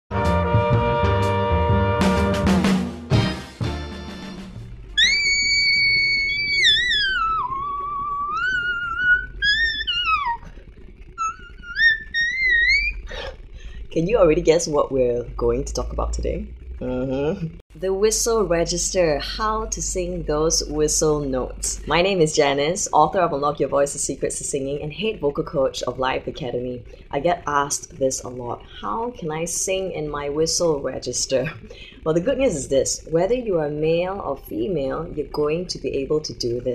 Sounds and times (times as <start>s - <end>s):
Music: 0.1s - 7.6s.